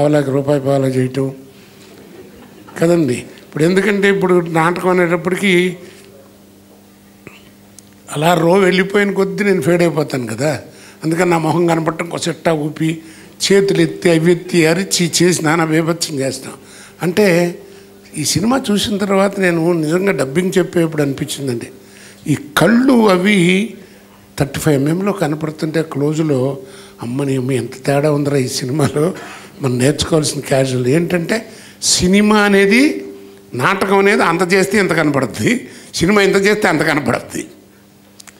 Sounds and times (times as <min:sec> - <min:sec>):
Speech: 0:00.0 - 0:01.4, 0:02.8 - 0:06.4, 0:08.1 - 0:23.8, 0:24.4 - 0:37.6
Laughter: 0:02.0 - 0:02.8.